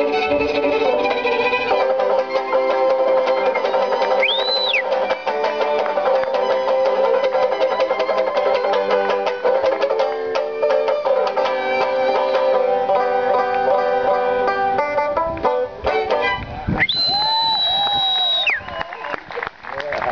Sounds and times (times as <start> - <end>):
Banjo: 0.0 - 16.8
Violin, fiddle: 0.0 - 17.2.